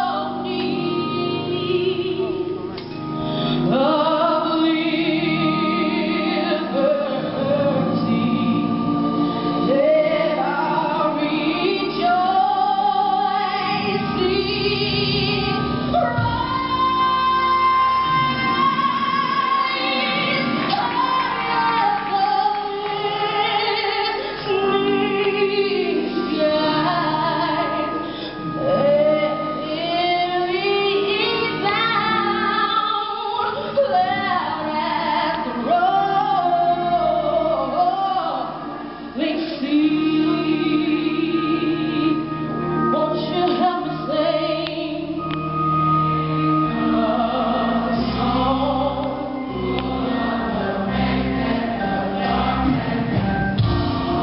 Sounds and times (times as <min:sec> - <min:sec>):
Female singing: 0:03.7 - 0:09.1, 0:09.7 - 0:28.0, 0:28.6 - 0:38.5, 0:39.2 - 0:42.2.